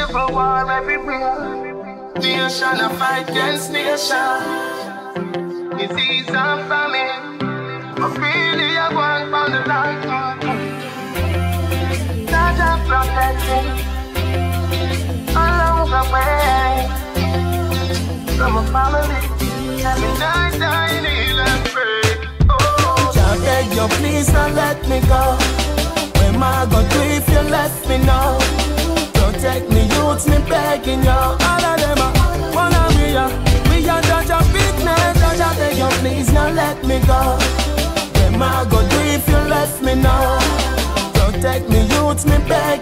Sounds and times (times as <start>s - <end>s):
Afrobeat: 0.0s - 4.8s, 10.5s - 42.8s.